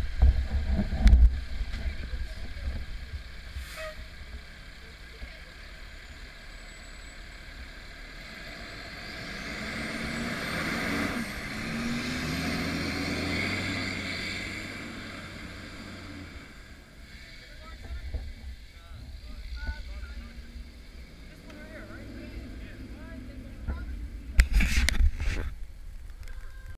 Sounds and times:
Car: 0.0s - 26.7s
Accelerating, revving, vroom: 7.8s - 17.4s.

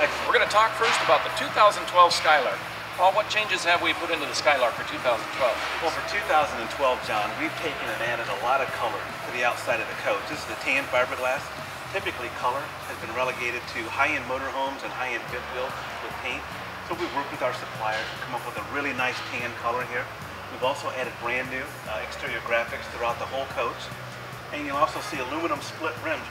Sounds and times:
Speech: 0.0s - 23.9s, 24.5s - 26.3s
Music: 0.0s - 26.3s.

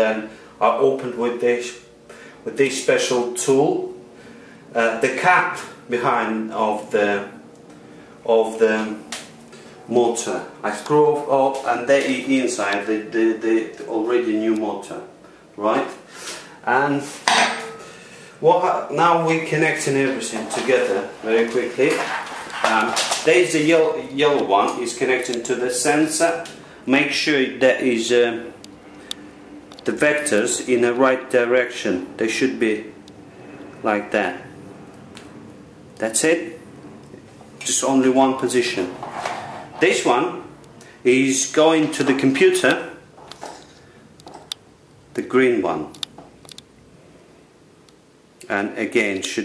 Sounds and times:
Speech: 0.0s - 4.0s, 4.7s - 7.4s, 8.2s - 9.0s, 9.9s - 16.0s, 16.6s - 17.2s, 18.4s - 28.6s, 29.8s - 33.0s, 33.8s - 34.5s, 36.0s - 36.6s, 37.6s - 39.0s, 39.8s - 43.0s, 45.2s - 46.0s, 48.4s - 49.4s.

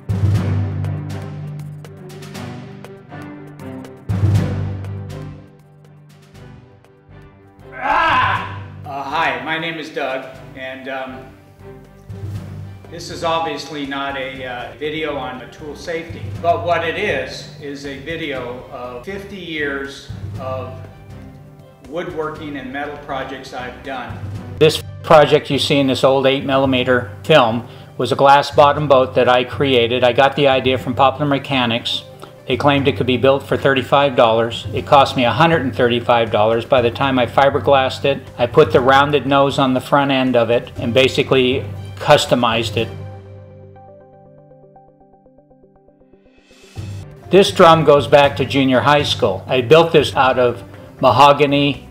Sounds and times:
Music: 0.0s - 51.9s
Speech: 7.8s - 11.3s, 12.9s - 20.8s, 21.9s - 43.0s, 47.3s - 51.8s.

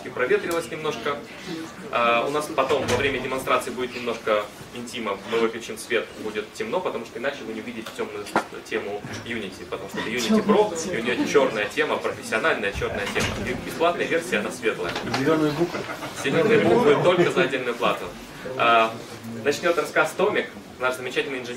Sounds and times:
Speech: 0.0s - 21.5s.

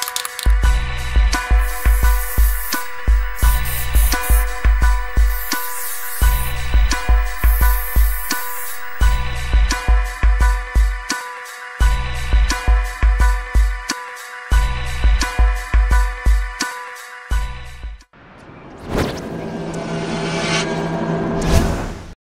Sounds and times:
Music: 0.0s - 18.6s.

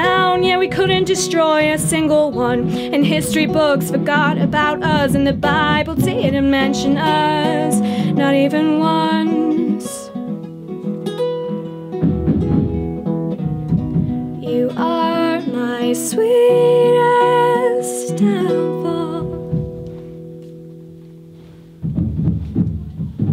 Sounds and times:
Flamenco: 0.0s - 23.3s.

